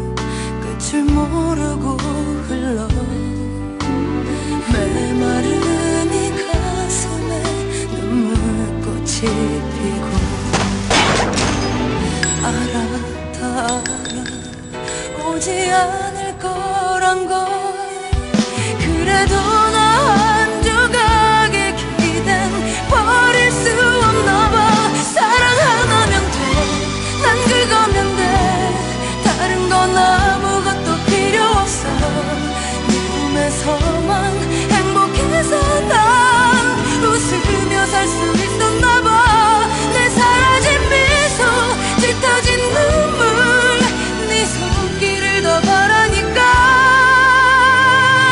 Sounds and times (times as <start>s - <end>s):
Pop music: 0.0s - 48.3s.